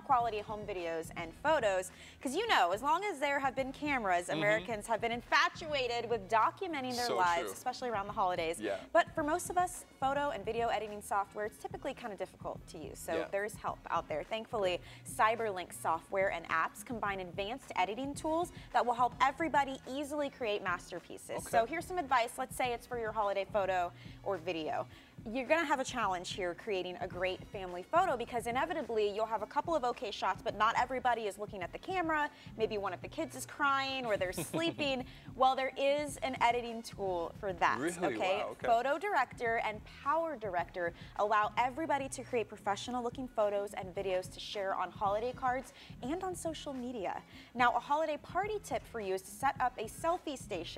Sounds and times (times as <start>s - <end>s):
Music: 0.0s - 50.7s
Speech: 2.3s - 15.4s, 16.4s - 22.2s, 28.4s - 47.8s.